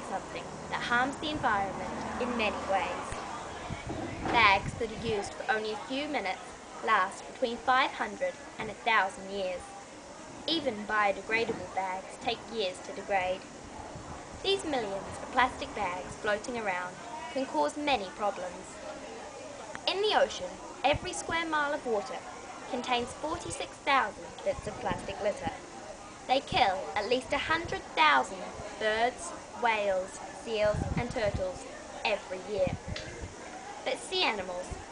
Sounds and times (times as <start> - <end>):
Female speech, woman speaking: 0.0 - 3.2, 4.2 - 9.8, 10.5 - 13.5, 14.5 - 18.8, 19.9 - 25.6, 26.3 - 32.9, 33.9 - 34.8.